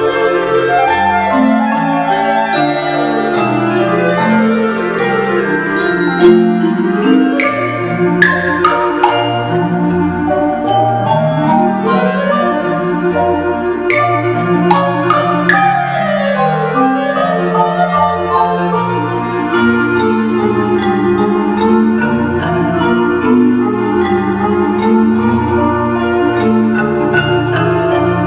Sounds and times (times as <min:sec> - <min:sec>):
Clarinet: 0:00.0 - 0:28.2
Classical music: 0:00.0 - 0:28.2
Marimba, xylophone: 0:00.0 - 0:28.2
Orchestra: 0:00.0 - 0:28.2
Piano: 0:00.0 - 0:28.2.